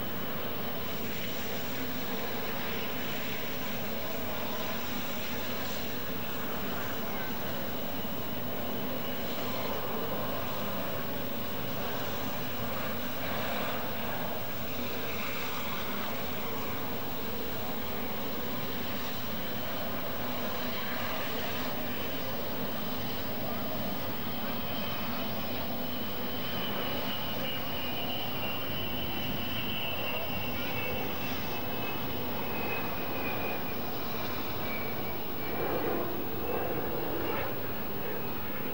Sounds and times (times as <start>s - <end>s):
Fixed-wing aircraft, airplane: 0.0s - 38.7s.